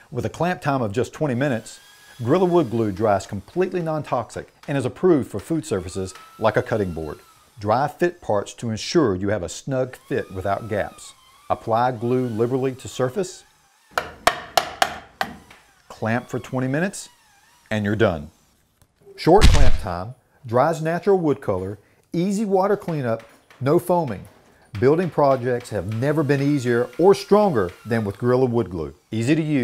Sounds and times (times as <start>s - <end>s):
Speech: 0.1s - 13.4s, 15.9s - 17.1s, 17.7s - 18.3s, 19.1s - 29.6s.